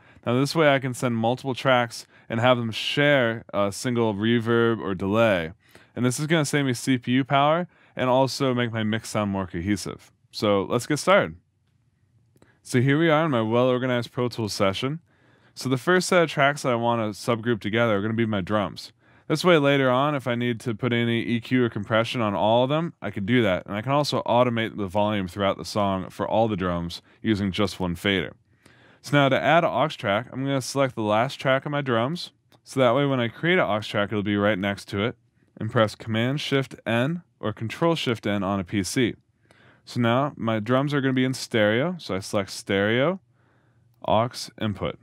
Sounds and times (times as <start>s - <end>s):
Speech: 0.2s - 11.4s, 12.6s - 15.0s, 15.6s - 28.4s, 29.0s - 39.2s, 39.8s - 43.2s, 44.0s - 45.0s.